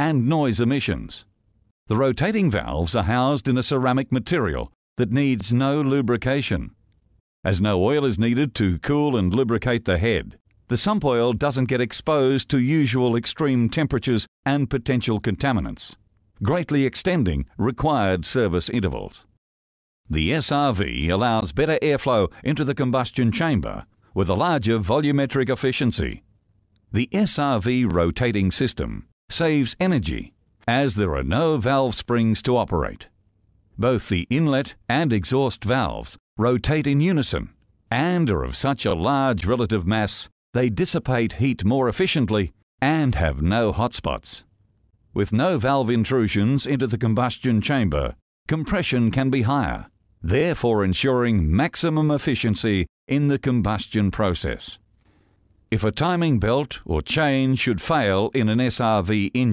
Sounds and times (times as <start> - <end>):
Speech: 0.0 - 1.3, 1.9 - 6.8, 7.5 - 19.3, 20.1 - 26.2, 27.0 - 33.1, 33.8 - 44.5, 45.2 - 54.8, 55.8 - 59.5.